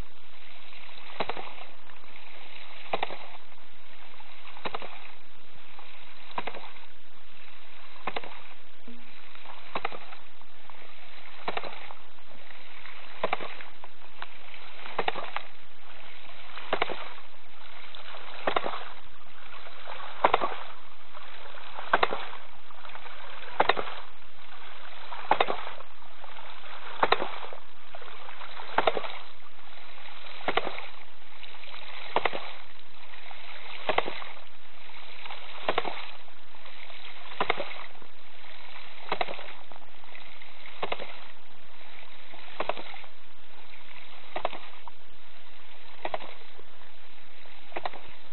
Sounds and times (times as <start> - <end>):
Water: 0.0 - 48.3.